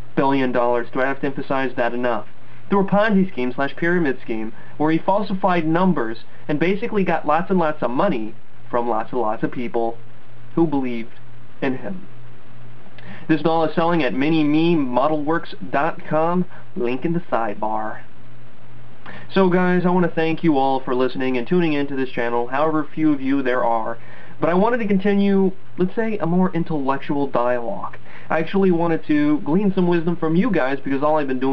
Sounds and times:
Inside, small room: 0.0 - 31.5
Speech: 0.2 - 12.1, 13.0 - 18.1, 19.1 - 31.5.

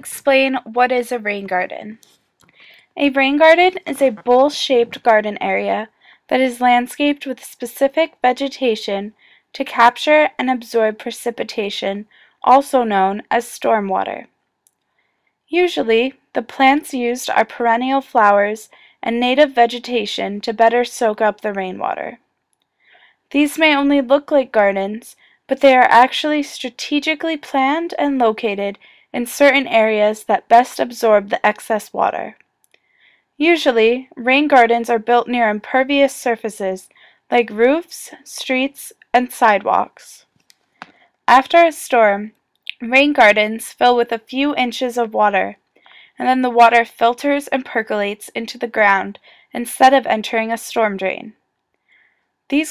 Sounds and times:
Speech: 0.0 - 2.0, 3.0 - 14.3, 15.5 - 22.2, 23.3 - 32.4, 33.4 - 40.2, 41.3 - 45.6, 46.2 - 51.4.

